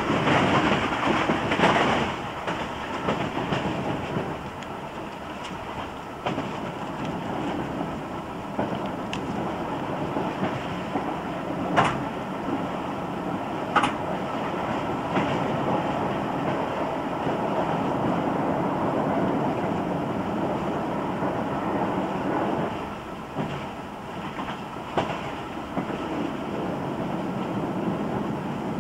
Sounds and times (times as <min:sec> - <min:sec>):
Clickety-clack: 0:00.0 - 0:08.0, 0:08.6 - 0:12.7, 0:13.7 - 0:18.2, 0:22.3 - 0:28.8
Train: 0:00.0 - 0:28.8
Wind: 0:00.0 - 0:28.8.